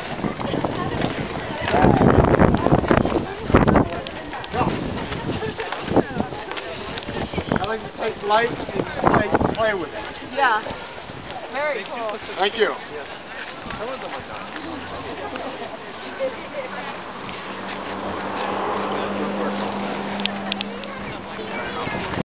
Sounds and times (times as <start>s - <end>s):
Speech: 18.9s - 22.2s.